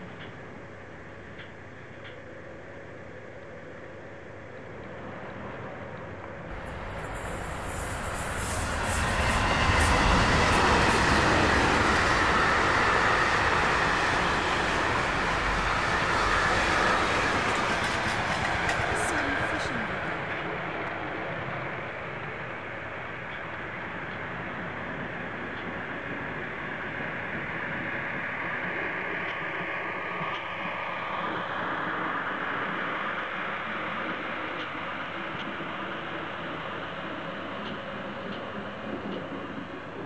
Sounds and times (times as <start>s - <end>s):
Train: 0.0s - 40.0s.